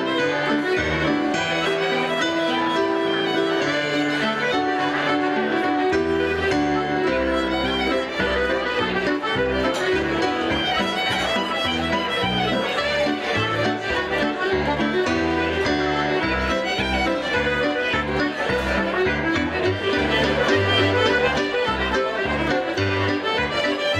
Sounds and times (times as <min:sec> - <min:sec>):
Wedding music: 0:00.1 - 0:23.9
Traditional music: 0:05.9 - 0:23.9.